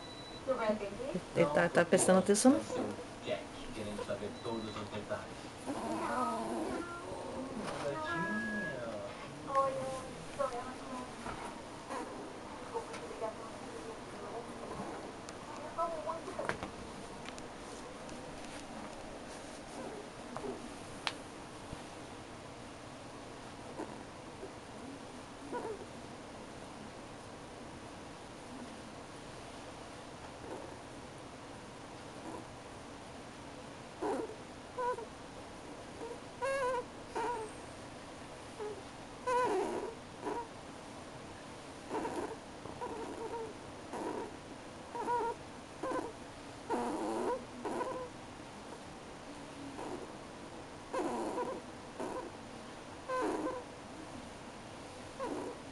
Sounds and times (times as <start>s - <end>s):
Domestic animals, pets: 5.6s - 8.9s, 11.3s - 13.9s, 19.7s - 20.7s, 23.7s - 24.6s, 25.5s - 25.9s, 30.4s - 30.9s, 32.2s - 32.5s, 34.0s - 35.2s, 35.9s - 37.7s, 38.6s - 40.6s, 41.9s - 48.8s, 49.6s - 50.2s, 50.9s - 52.4s, 53.0s - 53.7s, 55.1s - 55.7s.